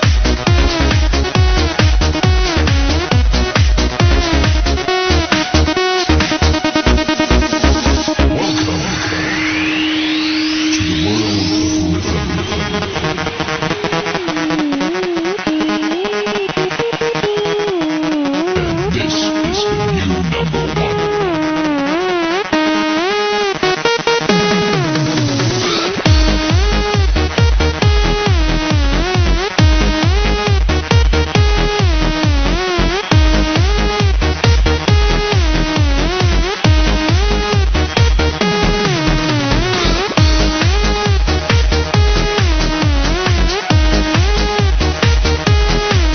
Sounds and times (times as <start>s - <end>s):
House music: 0.0s - 46.1s.